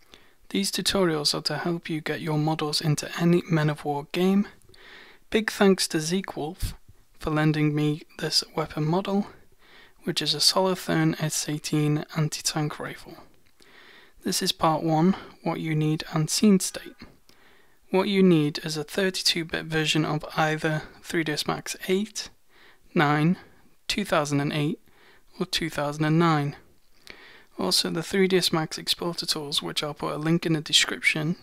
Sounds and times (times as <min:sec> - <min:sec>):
Speech: 0:00.5 - 0:04.6, 0:05.3 - 0:09.4, 0:10.0 - 0:13.3, 0:14.2 - 0:17.1, 0:17.9 - 0:24.8, 0:25.4 - 0:26.7, 0:27.6 - 0:31.4.